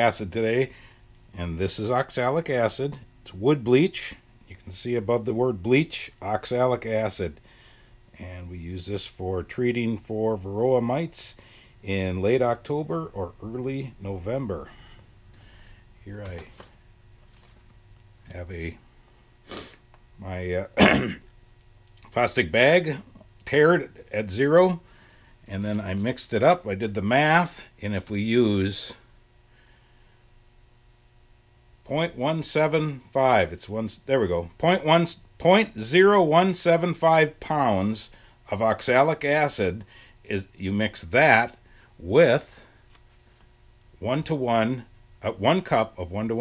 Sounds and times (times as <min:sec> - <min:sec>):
Speech: 0:00.0 - 0:00.7, 0:01.4 - 0:07.4, 0:08.2 - 0:14.7, 0:16.0 - 0:16.6, 0:18.3 - 0:18.8, 0:20.2 - 0:21.2, 0:22.1 - 0:24.8, 0:25.5 - 0:29.1, 0:31.8 - 0:42.7, 0:44.0 - 0:46.4.